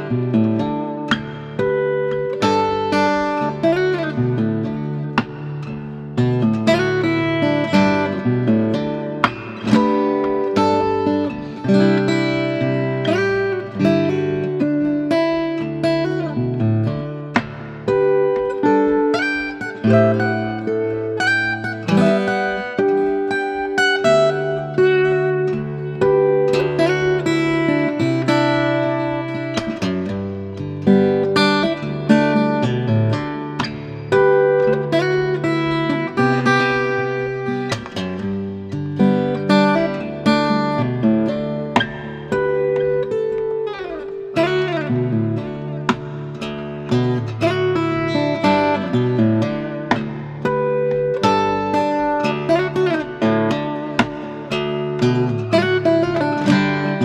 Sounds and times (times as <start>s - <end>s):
Acoustic guitar: 0.0s - 57.0s
Strum: 0.0s - 57.0s.